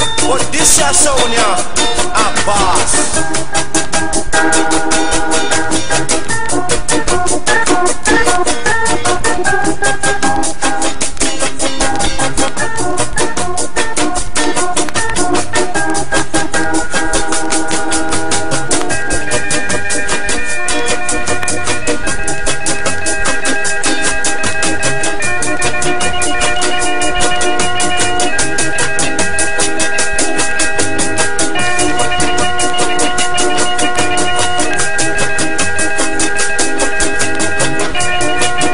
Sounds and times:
Music: 0.0s - 38.7s.

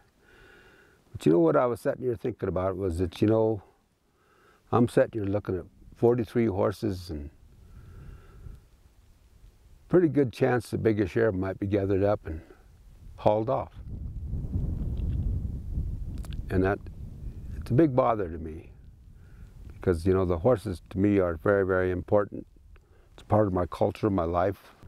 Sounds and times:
Speech: 1.2s - 3.7s, 4.7s - 7.4s, 9.9s - 12.6s, 13.2s - 13.8s, 16.4s - 16.9s, 17.6s - 18.8s, 19.8s - 22.5s, 23.2s - 24.8s.

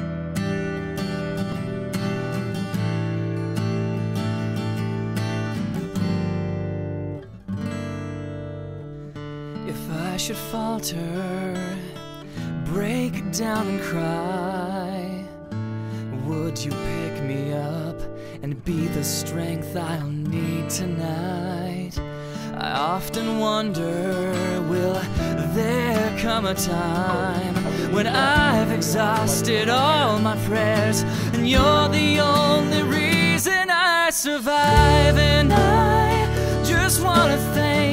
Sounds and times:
Speech: 24.7s - 33.5s
Happy music: 24.8s - 33.4s, 34.7s - 37.9s.

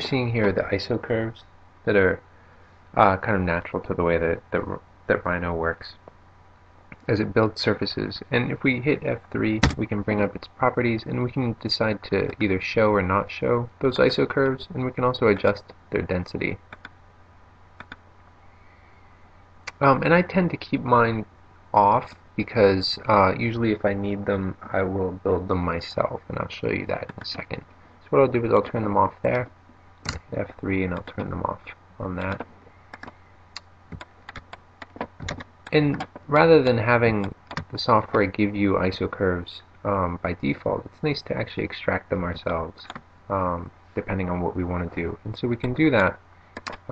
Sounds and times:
Speech: 0.0s - 2.2s, 3.0s - 6.1s, 7.0s - 16.7s, 19.7s - 29.6s, 30.3s - 32.5s, 35.7s - 46.2s.

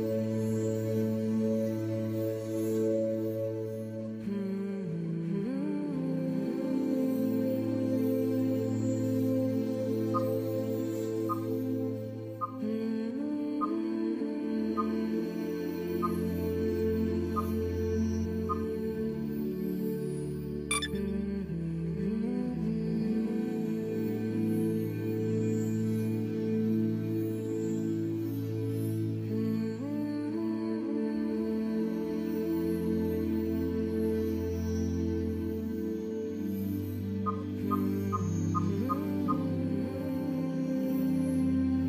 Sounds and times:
Music: 0.0s - 41.8s.

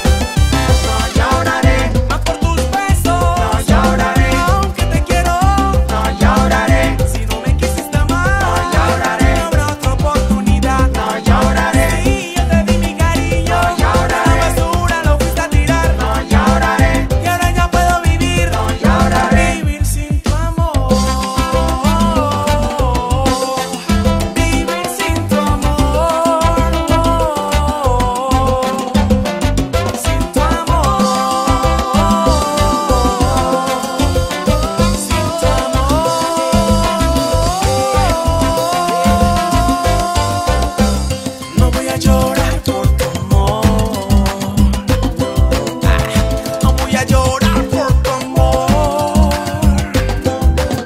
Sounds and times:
Music of Africa: 0.0s - 50.8s
Salsa music: 0.0s - 50.8s.

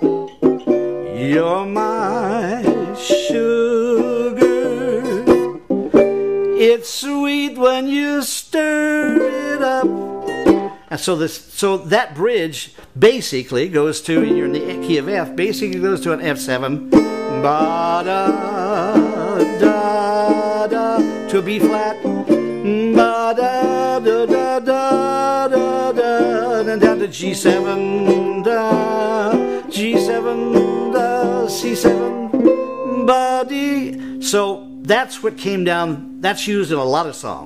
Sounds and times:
Banjo: 0.0s - 6.6s, 9.0s - 10.8s, 14.2s - 33.1s
Acoustic guitar: 0.0s - 11.1s, 14.1s - 37.4s
Speech: 10.9s - 16.8s, 34.3s - 37.4s.

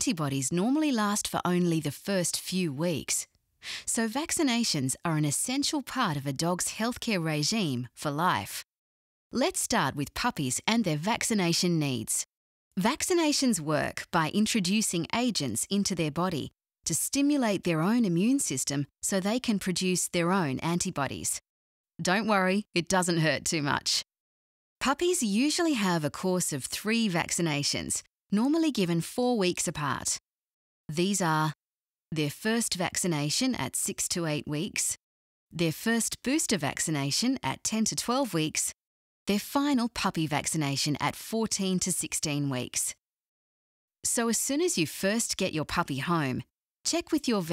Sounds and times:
Speech: 0.0s - 8.6s, 9.4s - 21.4s, 22.0s - 24.1s, 24.8s - 30.2s, 30.9s - 31.6s, 32.2s - 35.0s, 35.6s - 43.0s, 44.1s - 47.5s.

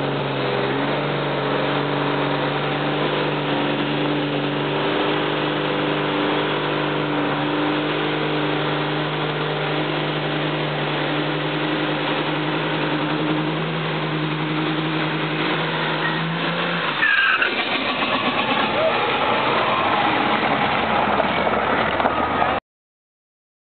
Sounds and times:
Vehicle: 0.0s - 22.6s.

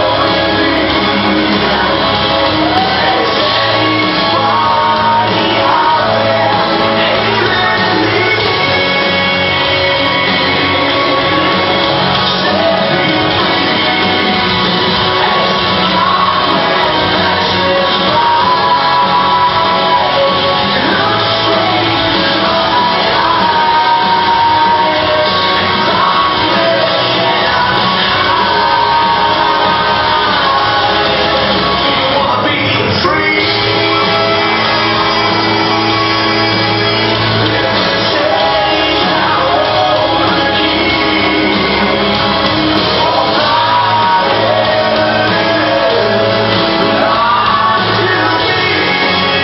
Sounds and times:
Inside, large room or hall: 0.0s - 49.4s
Music: 0.0s - 49.4s
Singing: 0.0s - 49.4s.

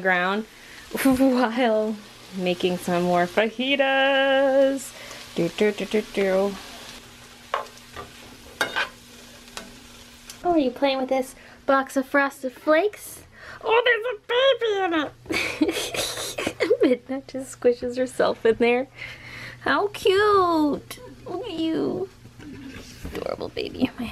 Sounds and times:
Frying (food): 0.0s - 24.1s.

